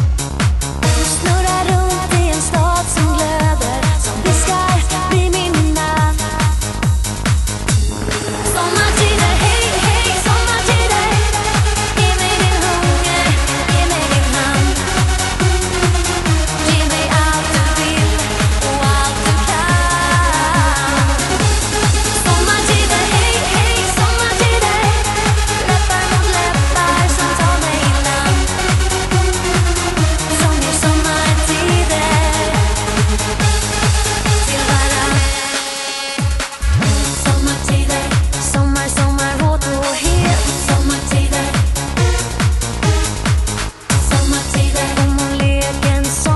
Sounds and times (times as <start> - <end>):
Techno: 0.0 - 46.3.